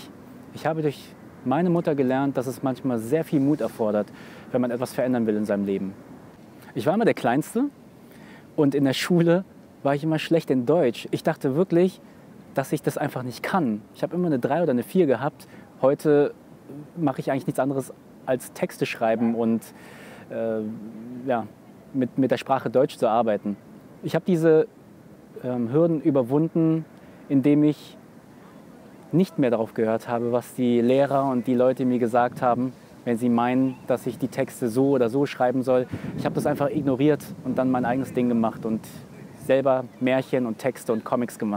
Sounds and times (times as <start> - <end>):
Speech: 0.0 - 6.0, 6.7 - 7.8, 8.6 - 12.0, 12.6 - 24.7, 25.4 - 41.5.